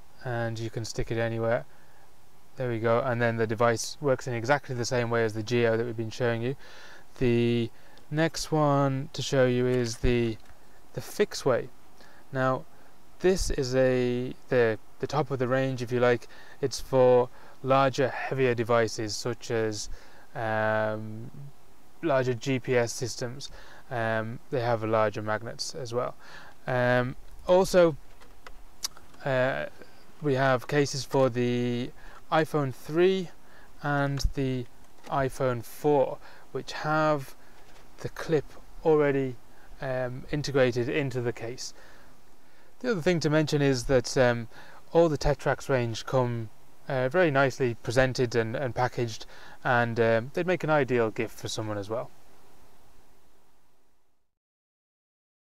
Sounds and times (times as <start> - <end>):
Speech: 0.2 - 1.7, 2.6 - 6.6, 7.2 - 10.4, 11.0 - 11.7, 12.3 - 28.0, 28.9 - 37.4, 38.0 - 41.8, 42.8 - 52.1.